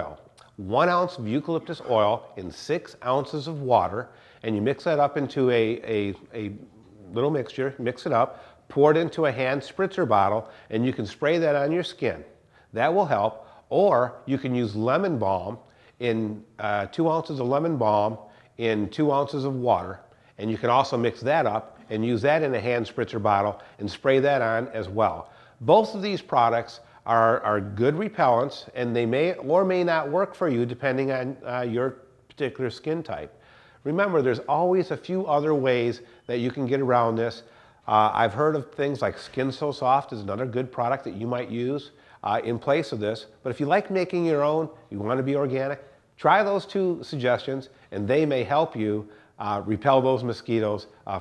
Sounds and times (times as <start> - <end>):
Speech: 0.0 - 51.2.